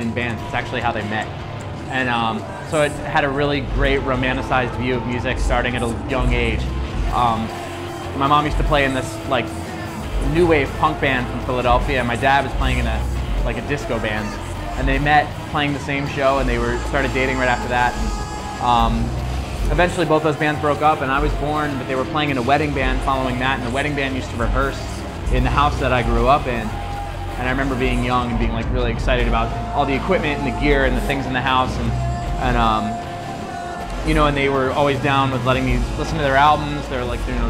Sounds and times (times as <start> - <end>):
Speech: 0.0 - 1.3, 1.9 - 9.6, 10.2 - 26.8, 27.4 - 33.1, 34.0 - 37.4
Music: 0.0 - 37.4.